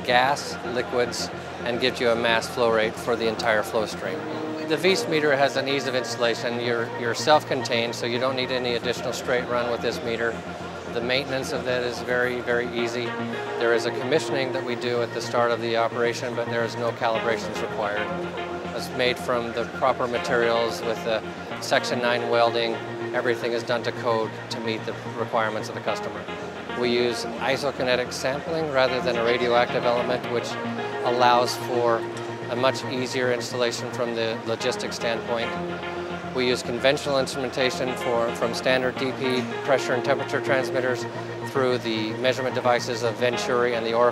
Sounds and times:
Speech: 0.0s - 18.1s, 18.8s - 26.2s, 26.8s - 35.6s, 36.4s - 44.1s
Music: 0.0s - 44.1s.

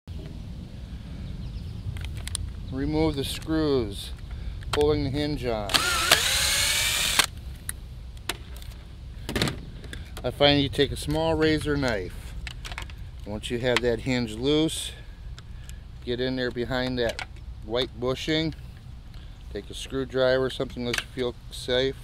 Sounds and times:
Speech: 2.7s - 4.2s, 4.8s - 5.8s, 10.2s - 12.2s, 13.3s - 15.0s, 16.0s - 18.6s, 19.5s - 22.0s.

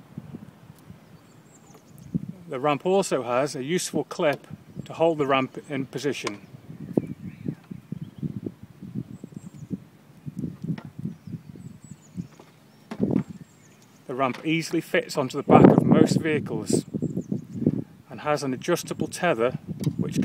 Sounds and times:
Speech: 2.4s - 6.4s, 14.1s - 16.9s, 18.1s - 20.2s.

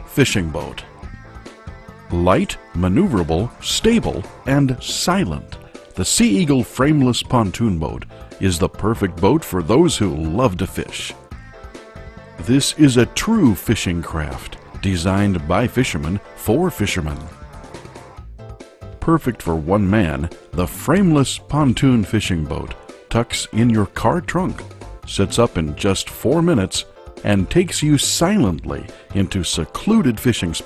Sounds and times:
Music: 0.0s - 30.6s
Speech: 0.1s - 0.9s, 2.1s - 11.2s, 12.4s - 17.4s, 19.0s - 30.6s.

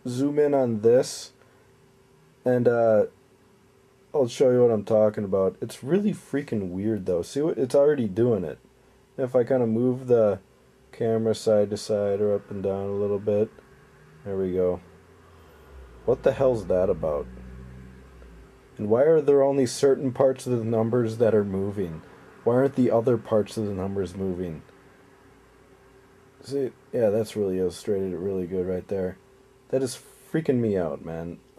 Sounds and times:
Speech: 0.0s - 1.4s, 2.5s - 3.1s, 4.2s - 8.6s, 9.2s - 13.6s, 14.2s - 14.8s, 16.1s - 17.3s, 18.8s - 24.7s, 26.4s - 31.5s.

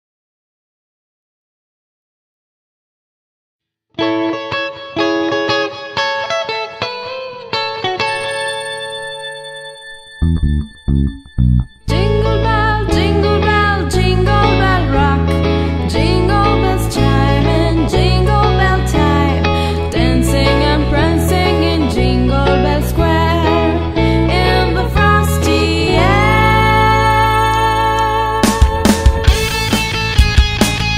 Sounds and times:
Jingle, tinkle: 8.1s - 13.0s.

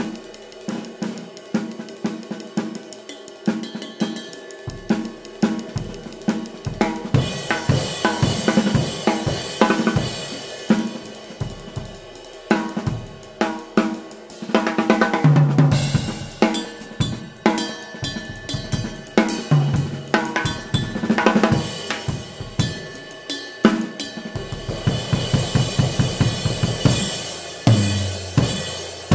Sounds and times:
Hi-hat: 0.0s - 14.6s
Drum kit: 0.0s - 29.1s.

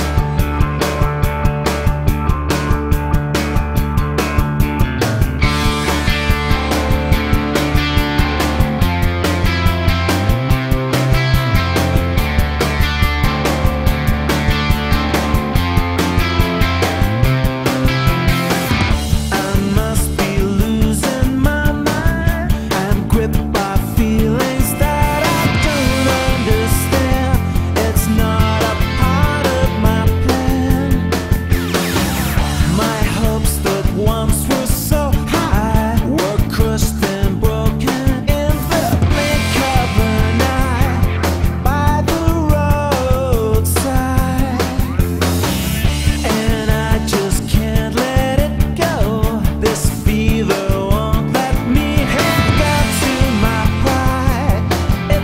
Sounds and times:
Music: 0.0s - 55.2s.

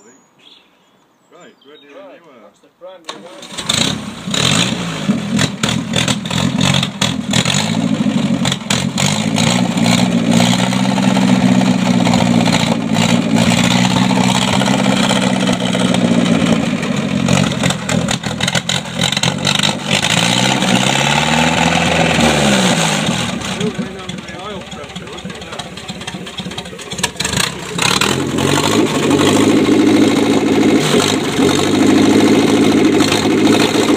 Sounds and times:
Speech: 0.0s - 0.2s, 1.3s - 3.4s, 23.6s - 25.8s
Engine: 3.1s - 33.9s.

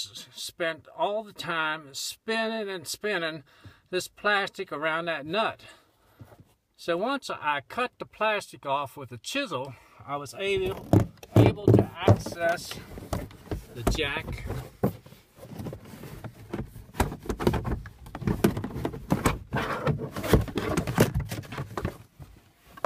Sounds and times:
Speech: 0.0s - 5.8s, 6.8s - 12.9s, 13.7s - 14.6s.

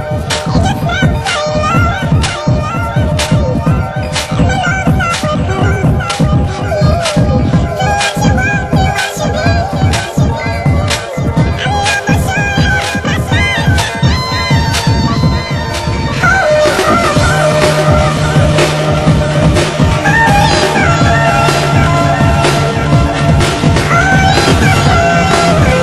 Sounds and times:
Music: 0.0s - 25.8s.

